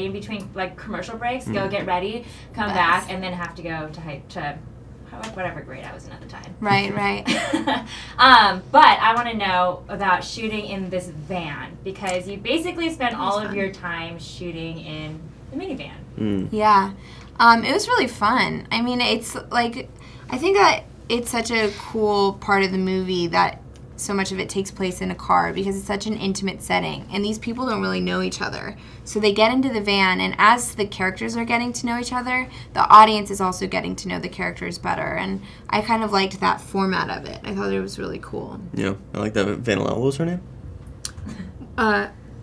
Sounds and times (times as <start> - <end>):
Speech: 0.0 - 4.2, 5.2 - 7.2, 8.4 - 13.8, 15.1 - 37.4, 38.8 - 40.4.